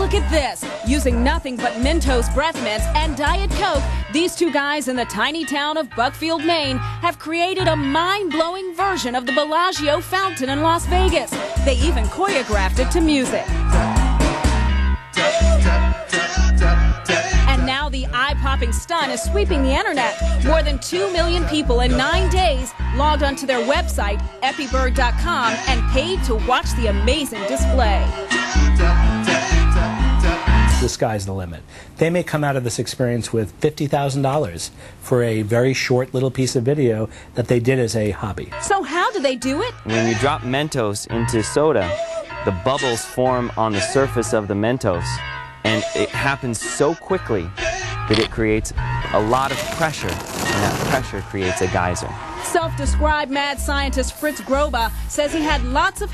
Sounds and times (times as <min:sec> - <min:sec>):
Music: 0:00.0 - 0:31.3, 0:37.8 - 0:56.1.